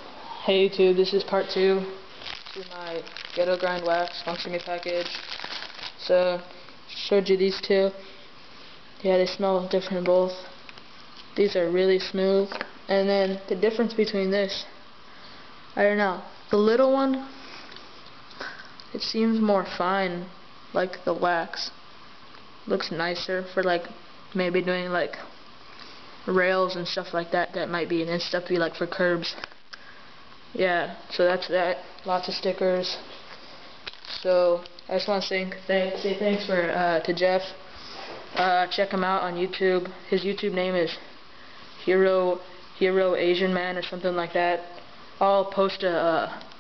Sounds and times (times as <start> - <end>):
Speech: 0.4 - 2.0, 2.6 - 5.3, 6.0 - 8.1, 9.0 - 10.6, 11.4 - 14.8, 15.8 - 17.4, 18.9 - 21.8, 22.7 - 25.3, 26.3 - 29.4, 30.6 - 33.1, 34.2 - 37.6, 38.4 - 41.1, 41.8 - 46.5.